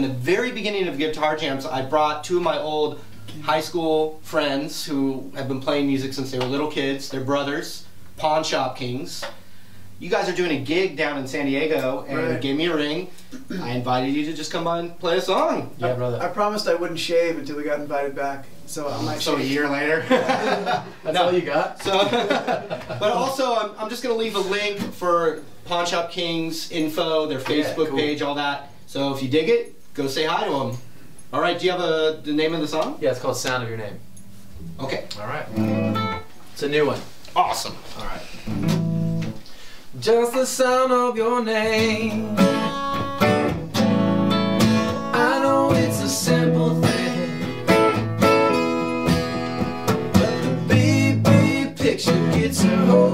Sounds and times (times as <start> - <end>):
Speech: 0.0 - 9.4, 10.0 - 20.1, 21.1 - 22.2, 23.0 - 34.0, 34.7 - 35.5, 36.6 - 38.3.